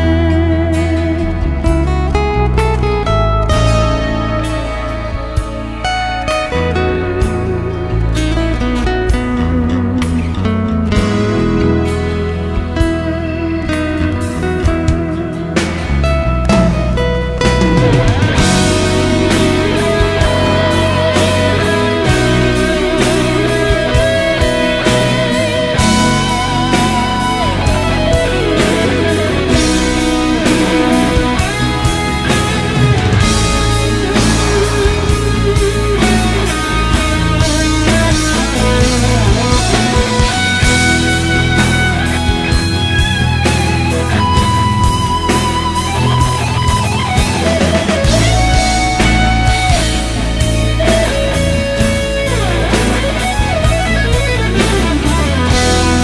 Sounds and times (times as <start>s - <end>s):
Music: 0.0s - 56.0s.